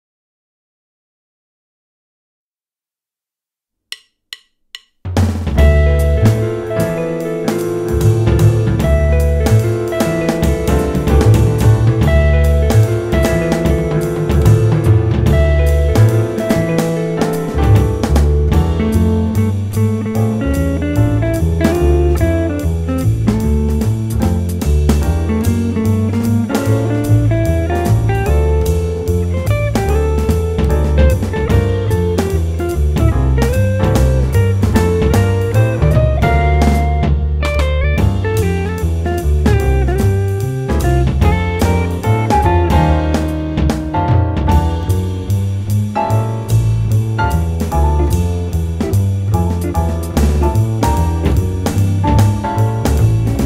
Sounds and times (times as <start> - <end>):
Music: 3.9 - 53.4.